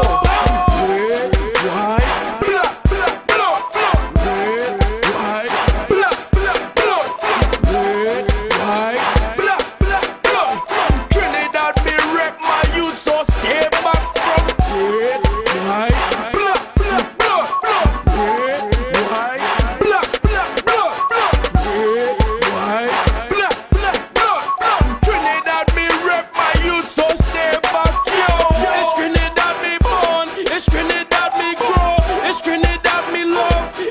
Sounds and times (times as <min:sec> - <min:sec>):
Happy music: 0:00.0 - 0:33.9
Pop music: 0:00.0 - 0:33.9.